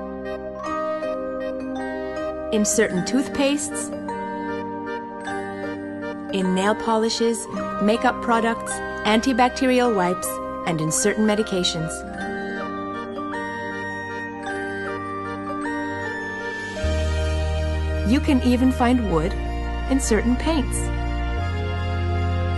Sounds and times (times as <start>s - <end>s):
Music: 0.0s - 22.5s
Speech: 2.6s - 3.9s, 6.4s - 12.0s, 18.1s - 20.9s.